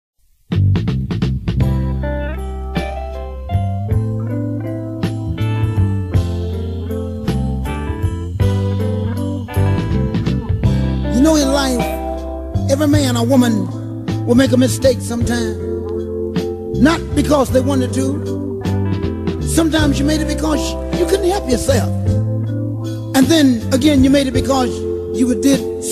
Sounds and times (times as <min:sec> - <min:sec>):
Music: 0:00.2 - 0:25.9.